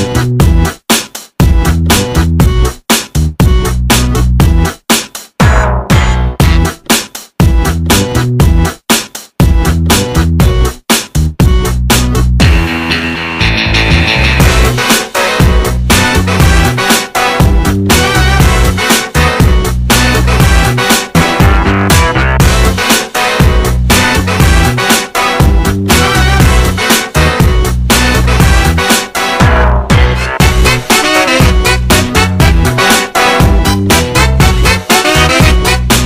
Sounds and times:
Music: 0.0 - 36.0.

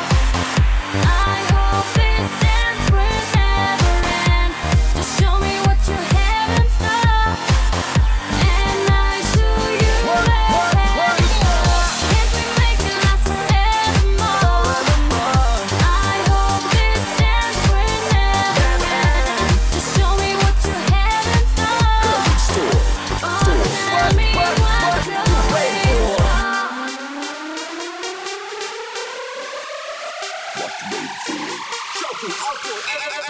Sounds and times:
Music: 0.0 - 33.2.

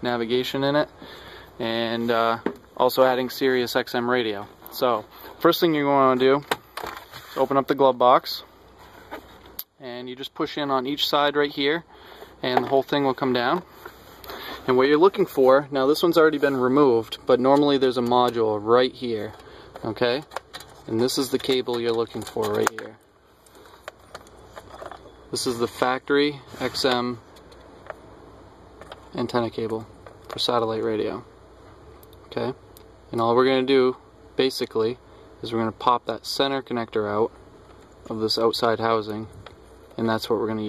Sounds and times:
Speech: 0.0 - 0.9, 1.6 - 6.5, 7.4 - 8.5, 9.7 - 13.7, 14.6 - 20.3, 20.9 - 23.0, 25.3 - 27.2, 29.1 - 31.3, 32.3 - 37.4, 38.1 - 39.4, 40.0 - 40.6.

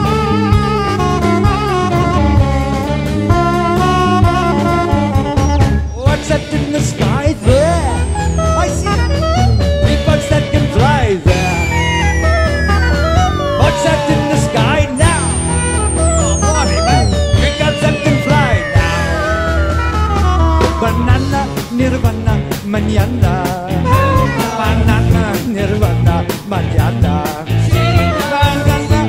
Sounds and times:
Progressive rock: 0.0 - 29.0
Singing: 9.8 - 11.8, 13.4 - 19.5, 20.6 - 29.0.

